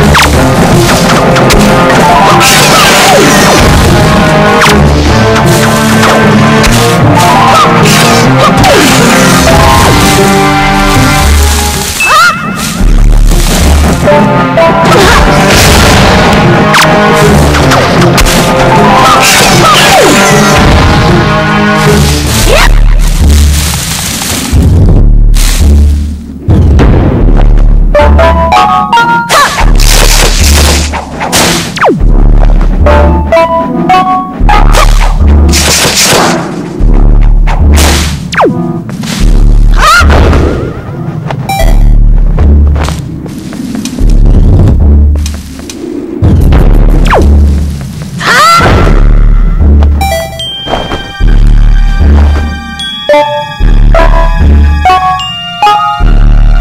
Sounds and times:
Music: 0.0s - 56.6s.

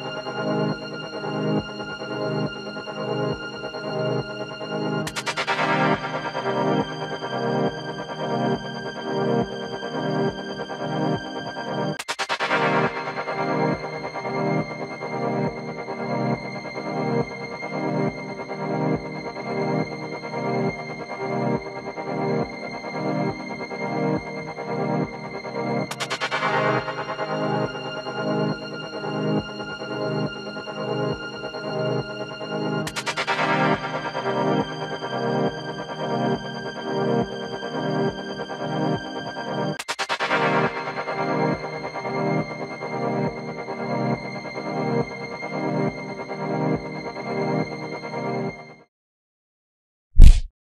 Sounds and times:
Music: 0.0s - 48.9s.

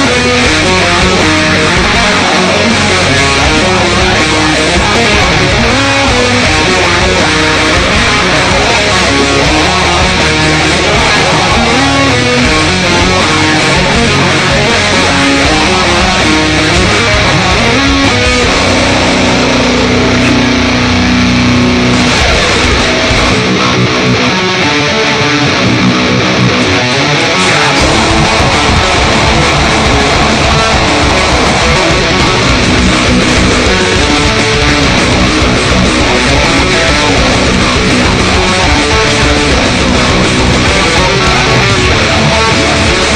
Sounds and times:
Electric guitar: 0.0s - 43.1s
Strum: 0.0s - 43.1s.

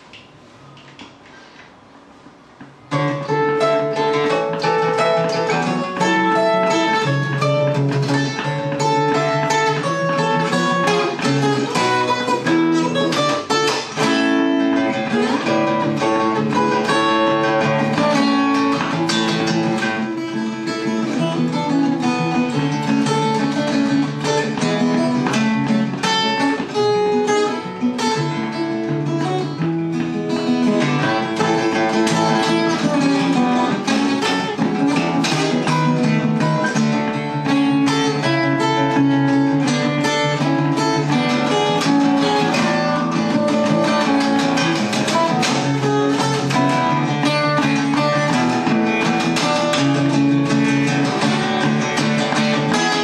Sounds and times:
Strum: 0.0s - 53.0s.

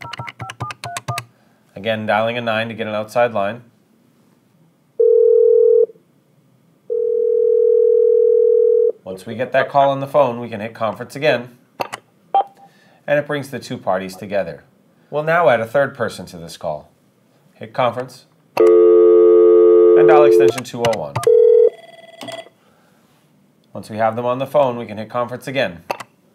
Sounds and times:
Speech: 1.8s - 3.7s, 9.0s - 11.6s, 13.1s - 16.9s, 17.6s - 18.3s, 20.0s - 21.2s, 23.7s - 25.9s.

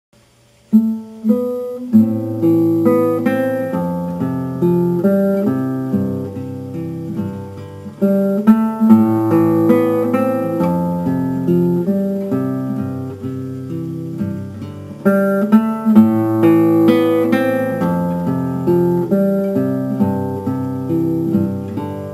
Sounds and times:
Guitar: 0.2s - 22.1s.

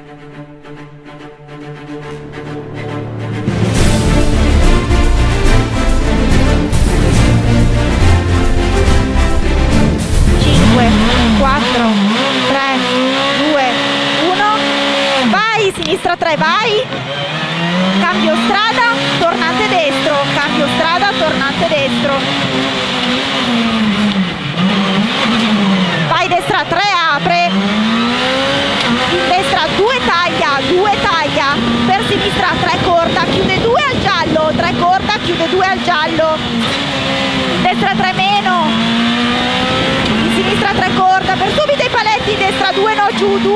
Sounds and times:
Car: 2.0s - 43.5s
Speech: 10.4s - 14.6s, 15.2s - 16.9s, 18.0s - 22.2s, 26.1s - 27.5s, 29.1s - 36.4s, 37.6s - 38.7s, 40.2s - 43.5s.

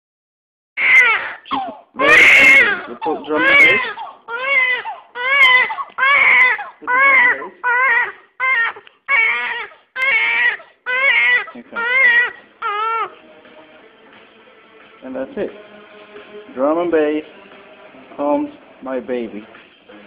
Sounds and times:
Baby cry, infant cry: 0.8s - 13.1s
Speech: 2.0s - 4.0s, 6.8s - 7.7s, 11.5s - 12.0s, 15.0s - 15.6s, 16.5s - 17.3s, 18.1s - 19.6s.

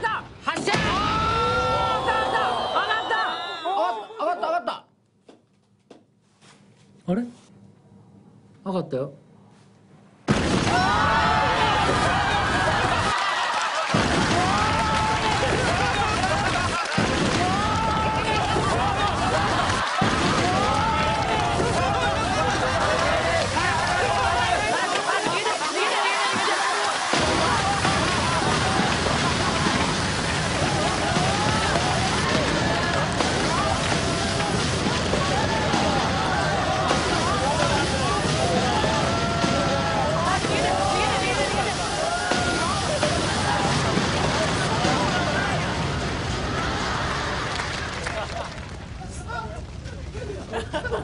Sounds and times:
Burst, pop: 10.3s - 13.2s, 13.8s - 48.2s.

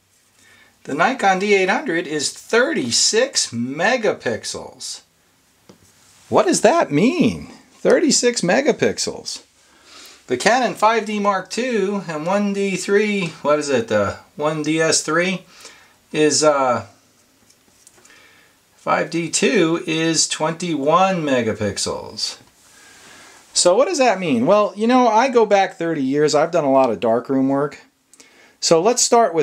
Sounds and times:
Inside, small room: 0.0s - 29.4s
Speech: 0.8s - 5.1s, 6.3s - 9.5s, 10.3s - 15.5s, 16.1s - 17.0s, 18.8s - 22.5s, 23.5s - 27.9s, 28.6s - 29.4s.

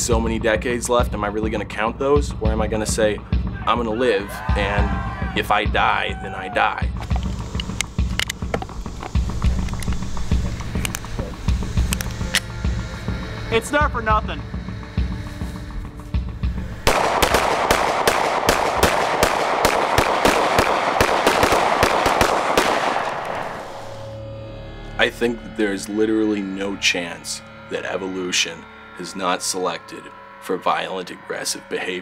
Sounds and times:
Speech: 0.0s - 6.9s, 25.0s - 32.0s
Music: 0.0s - 32.0s
Outside, rural or natural: 4.6s - 32.0s.

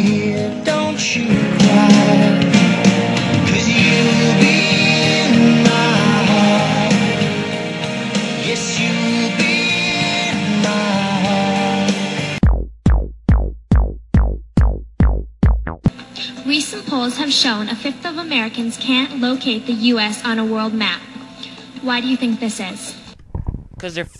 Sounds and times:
Drum machine: 12.3s - 15.9s.

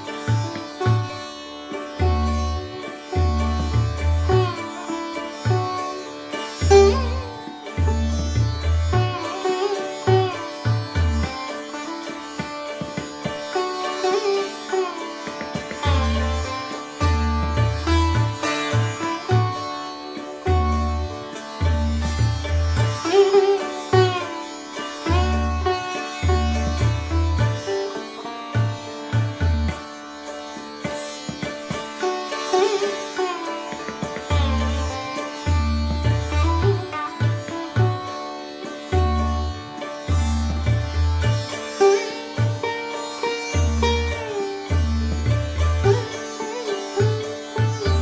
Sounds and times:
Sitar: 0.0s - 48.0s.

